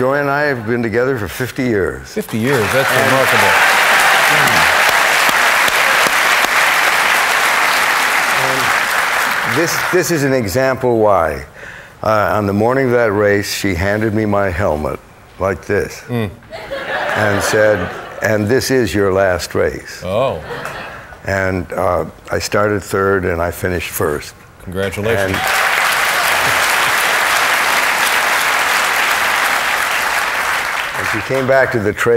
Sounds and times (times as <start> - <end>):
Applause: 2.5 - 10.0, 25.2 - 32.0.